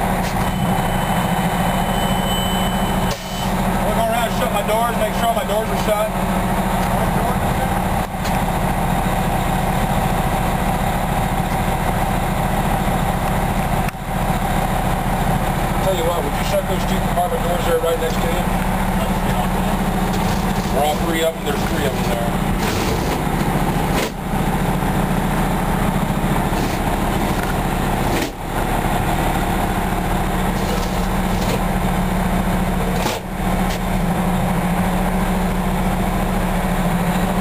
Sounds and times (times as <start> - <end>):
Heavy engine (low frequency): 0.0 - 37.4
Speech: 3.8 - 6.2, 6.8 - 7.8, 15.8 - 19.8, 20.7 - 22.4.